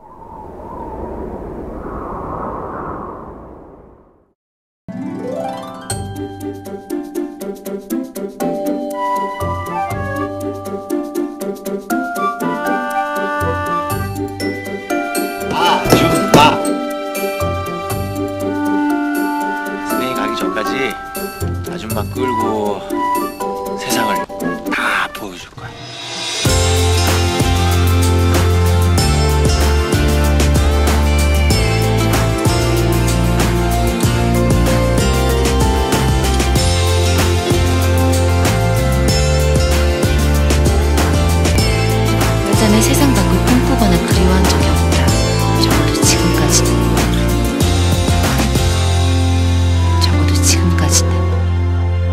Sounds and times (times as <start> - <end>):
Music: 4.9 - 52.1.